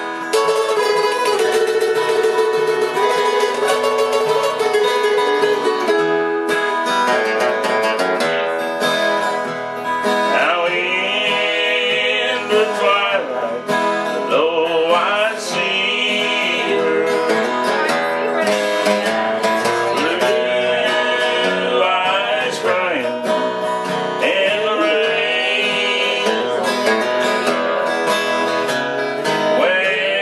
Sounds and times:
Country: 0.0 - 30.2
Guitar: 0.0 - 30.2
Singing: 10.3 - 17.7, 18.3 - 23.6, 24.2 - 27.9, 29.4 - 30.2.

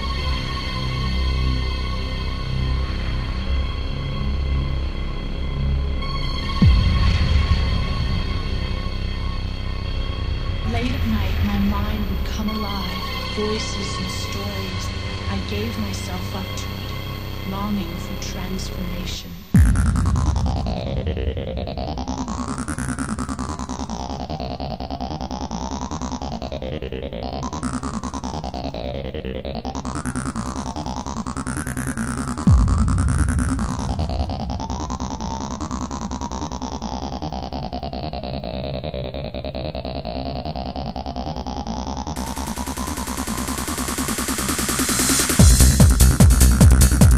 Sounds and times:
Electronic music: 0.0 - 47.1
Scary music: 0.0 - 47.1
Speech: 10.6 - 19.5.

